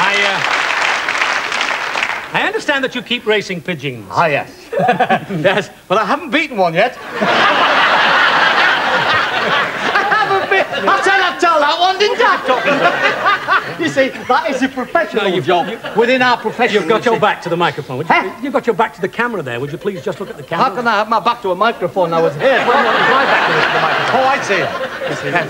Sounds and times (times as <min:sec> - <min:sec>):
Speech: 0:00.0 - 0:00.4, 0:02.3 - 0:07.0, 0:10.0 - 0:25.4.